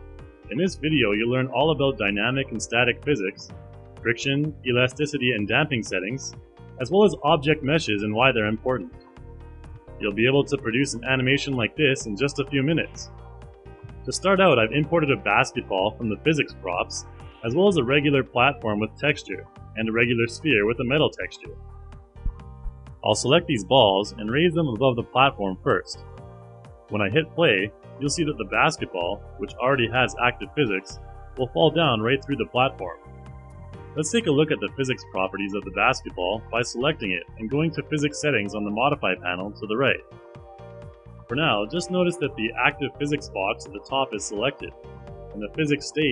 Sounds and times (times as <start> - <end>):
Music: 0.0 - 46.1
Speech: 0.5 - 8.9, 10.0 - 13.1, 14.1 - 21.6, 23.0 - 26.0, 26.9 - 33.0, 34.0 - 40.0, 41.3 - 44.7, 45.4 - 46.1.